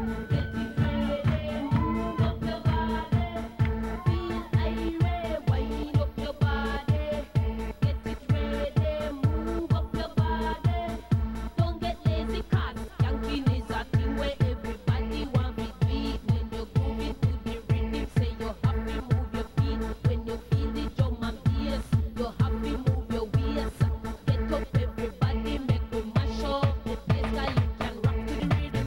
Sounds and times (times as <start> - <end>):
Music: 0.0 - 28.8.